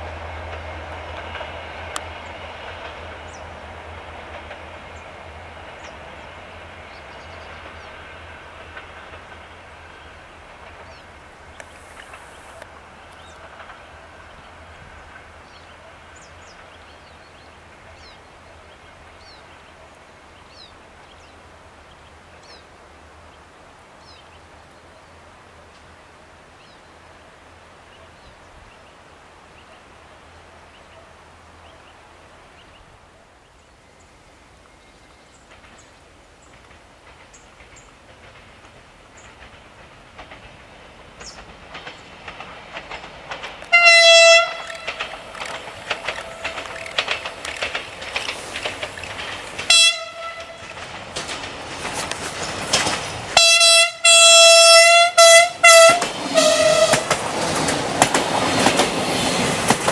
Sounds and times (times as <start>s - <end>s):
Railroad car, train wagon: 0.0s - 59.9s
Train: 0.0s - 59.9s
Vehicle horn, car horn, honking: 43.7s - 44.7s, 49.7s - 50.6s, 53.4s - 57.0s.